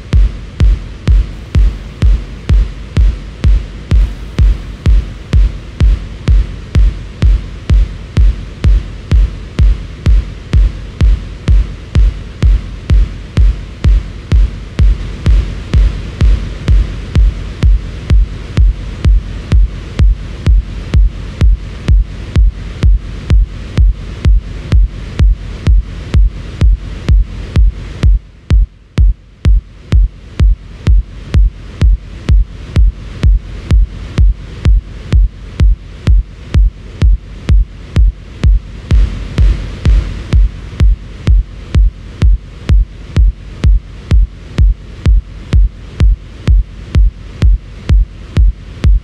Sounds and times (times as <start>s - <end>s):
Techno: 0.0s - 49.0s.